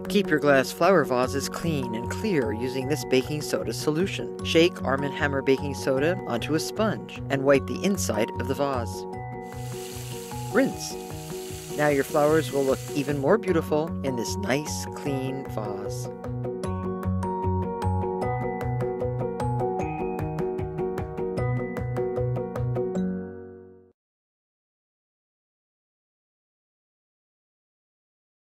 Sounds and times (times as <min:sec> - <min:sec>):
Music: 0:00.0 - 0:24.0.